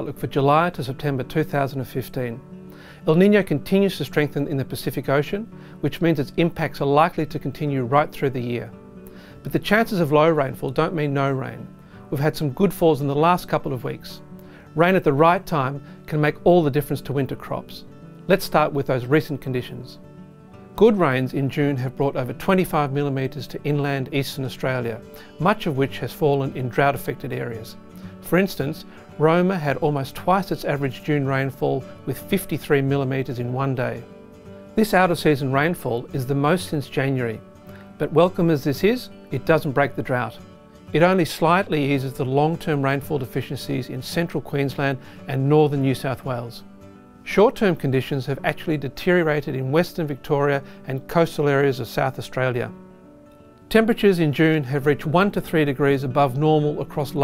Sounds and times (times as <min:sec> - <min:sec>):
Speech: 0:00.0 - 0:02.4, 0:03.0 - 0:08.8, 0:09.4 - 0:14.2, 0:14.8 - 0:20.0, 0:20.8 - 0:34.1, 0:34.8 - 0:37.4, 0:38.0 - 0:46.7, 0:47.3 - 0:52.8, 0:53.7 - 0:57.2
Music: 0:00.0 - 0:57.2.